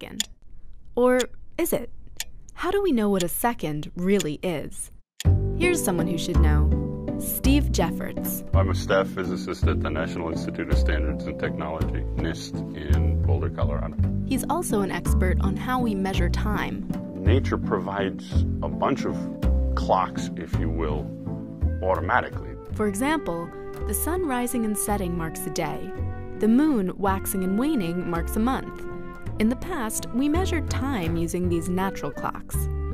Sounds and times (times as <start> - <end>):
Speech: 0.0 - 0.2, 1.0 - 1.9, 2.6 - 4.9, 5.6 - 21.1, 21.8 - 28.7, 29.4 - 32.6
Music: 5.2 - 32.9.